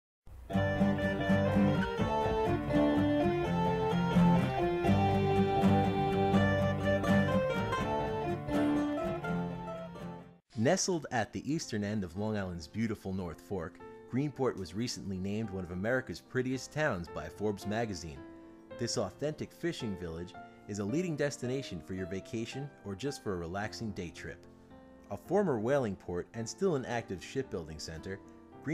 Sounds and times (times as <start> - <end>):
Guitar: 0.4 - 11.0
Bluegrass: 0.5 - 10.0.